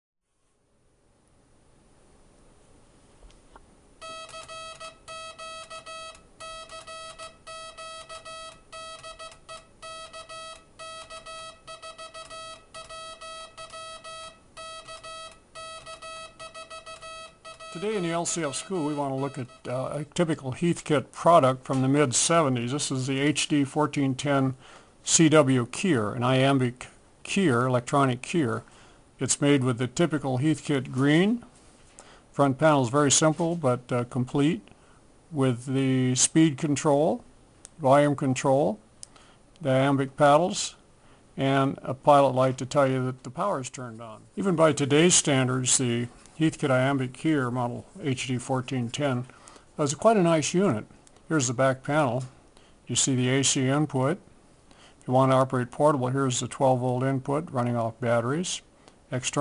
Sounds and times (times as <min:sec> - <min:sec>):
Inside, small room: 0:00.2 - 0:59.4.